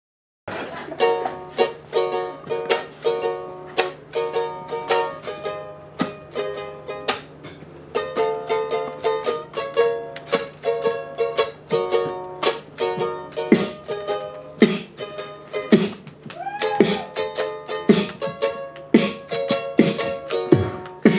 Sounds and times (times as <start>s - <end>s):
Mandolin: 0.5s - 21.1s.